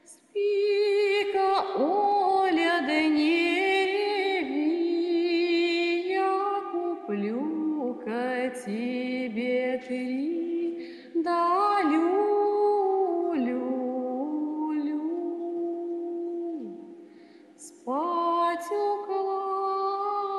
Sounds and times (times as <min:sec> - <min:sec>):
Lullaby: 0:00.0 - 0:17.0, 0:17.6 - 0:20.3.